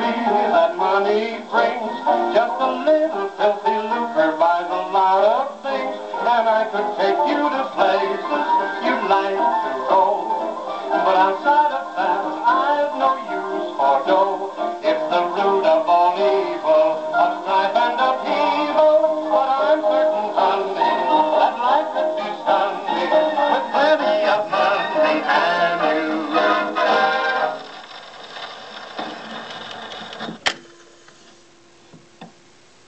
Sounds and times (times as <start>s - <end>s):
Music: 0.0s - 27.9s.